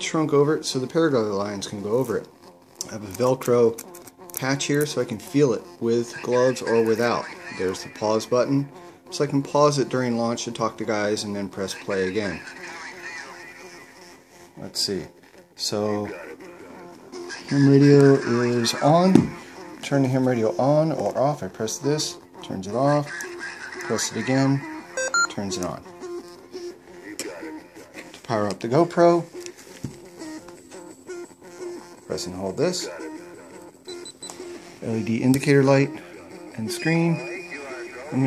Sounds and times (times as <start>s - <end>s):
Beep, bleep: 25.0s - 25.4s.